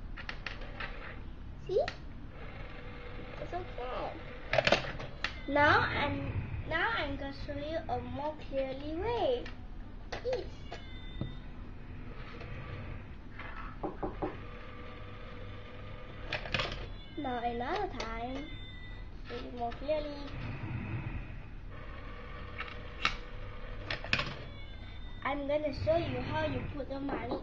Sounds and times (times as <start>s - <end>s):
Speech: 3.4s - 4.2s, 5.5s - 9.5s, 17.2s - 18.5s, 19.3s - 20.3s, 25.2s - 27.4s
Meow: 5.2s - 5.6s, 10.3s - 11.5s, 16.8s - 17.4s, 18.3s - 19.0s, 24.1s - 25.2s.